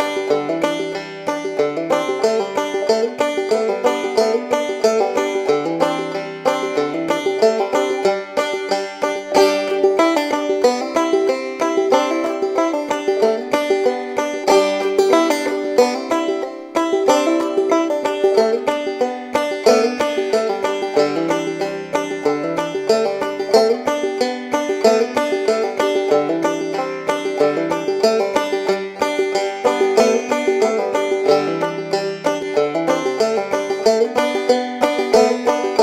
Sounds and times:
Music: 0:00.0 - 0:35.8.

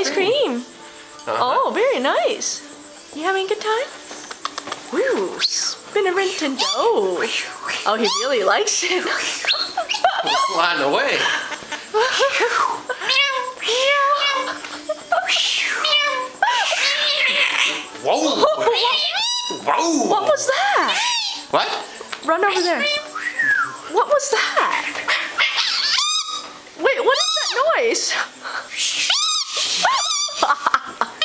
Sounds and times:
Domestic animals, pets: 0:06.3 - 0:07.0, 0:07.7 - 0:11.4, 0:12.1 - 0:17.9, 0:18.6 - 0:19.7, 0:20.7 - 0:21.5, 0:22.4 - 0:23.2, 0:24.6 - 0:28.1, 0:28.8 - 0:30.6
Giggle: 0:09.0 - 0:13.1, 0:14.4 - 0:15.4, 0:29.8 - 0:31.2.

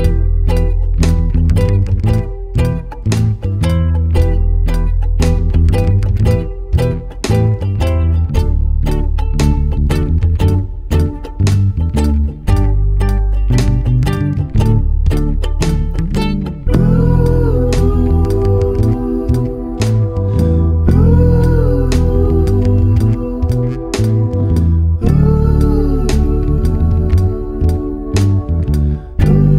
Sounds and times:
Music: 0:00.0 - 0:29.5.

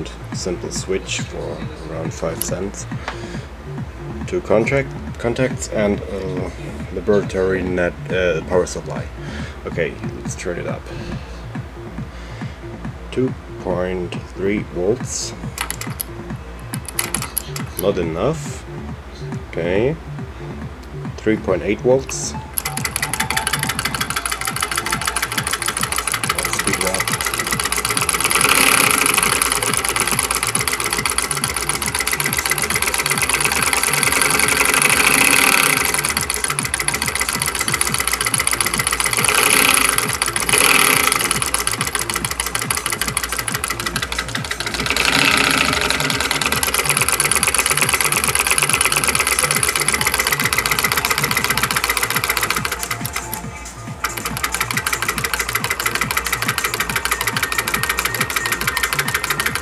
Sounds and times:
Speech: 0:00.0 - 0:02.9, 0:04.3 - 0:10.9, 0:13.1 - 0:15.4, 0:17.8 - 0:18.6, 0:19.5 - 0:20.0, 0:21.2 - 0:22.4, 0:26.3 - 0:27.1
Music: 0:00.0 - 0:59.6.

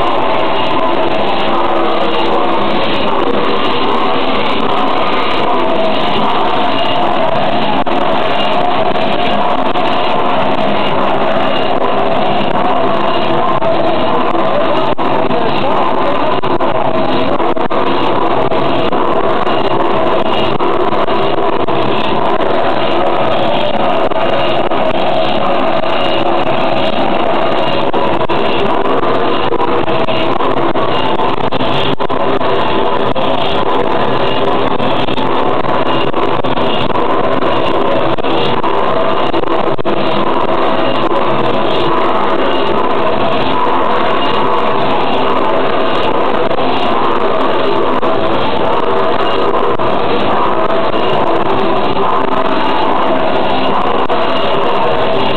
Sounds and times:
Heavy engine (low frequency): 0:00.0 - 0:55.3.

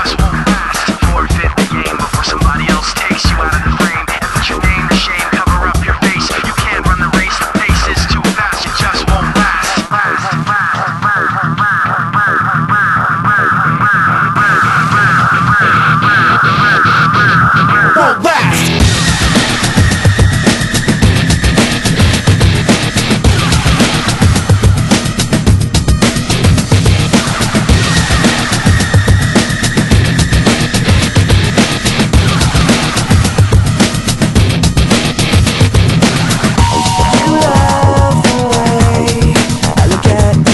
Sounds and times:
Music: 0:00.0 - 0:40.5.

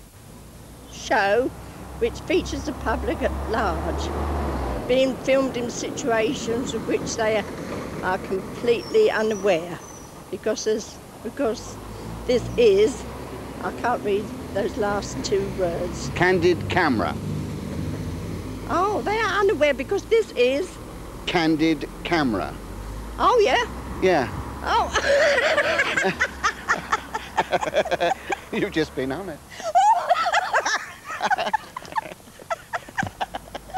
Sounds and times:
Speech: 0:00.9 - 0:04.1, 0:08.0 - 0:13.0, 0:13.6 - 0:17.2, 0:18.7 - 0:22.6, 0:23.2 - 0:25.0, 0:28.5 - 0:29.4.

